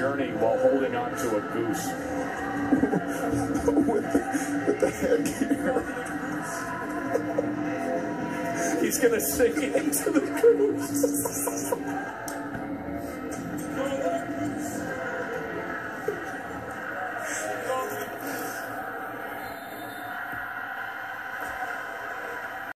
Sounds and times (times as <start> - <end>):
Music: 0.0 - 22.7.